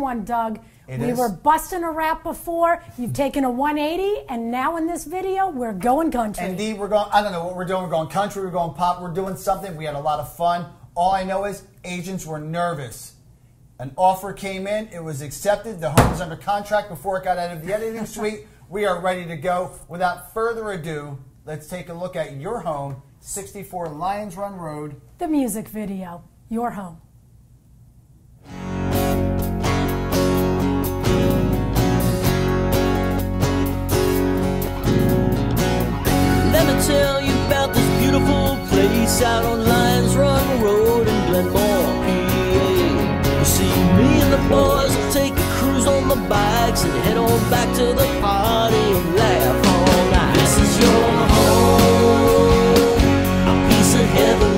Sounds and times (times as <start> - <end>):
Speech: 0.0 - 13.2.